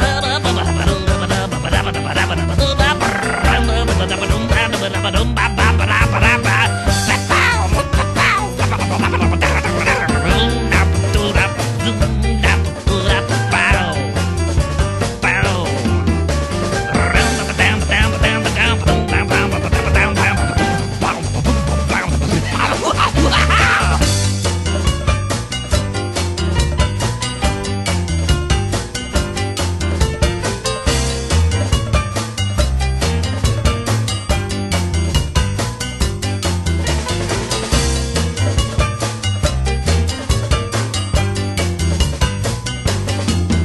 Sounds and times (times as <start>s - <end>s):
Video game music: 0.0s - 43.6s.